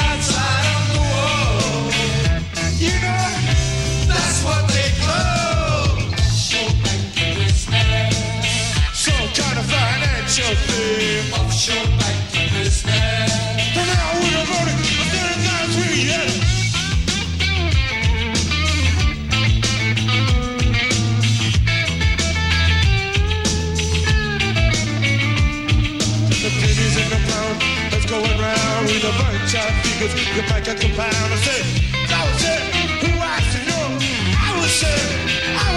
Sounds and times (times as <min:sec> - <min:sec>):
Singing: 0:00.0 - 0:16.4, 0:26.4 - 0:35.7.